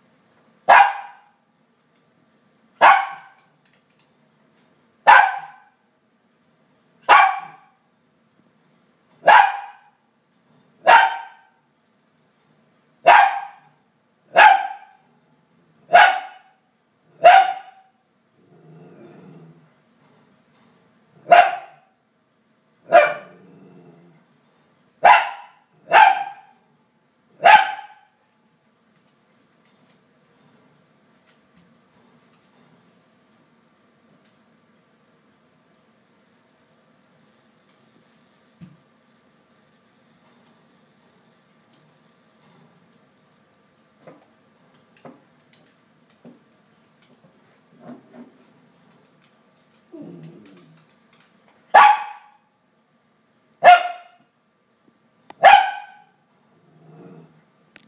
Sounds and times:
Yip: 0.7 - 1.4, 2.8 - 3.4, 5.1 - 5.7, 7.1 - 7.8, 9.2 - 10.0, 10.8 - 11.6, 13.1 - 15.0, 15.9 - 16.6, 17.2 - 17.9, 21.3 - 21.9, 22.9 - 23.3, 25.0 - 26.6, 27.4 - 28.1, 51.7 - 52.4, 53.6 - 54.2, 55.4 - 56.2
Bow-wow: 7.1 - 7.7, 14.3 - 15.0, 17.2 - 17.9, 22.9 - 23.4, 27.4 - 28.0, 51.7 - 52.4, 53.6 - 54.2, 55.4 - 56.2.

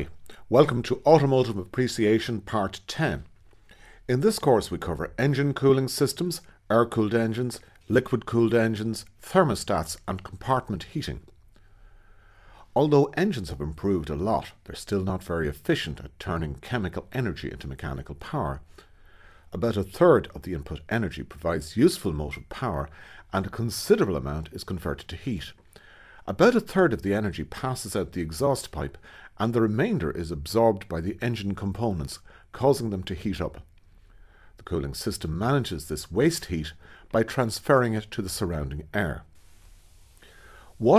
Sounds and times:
Speech: 0.0 - 3.3, 4.1 - 11.4, 12.8 - 18.7, 19.5 - 25.6, 26.3 - 33.7, 34.6 - 39.3.

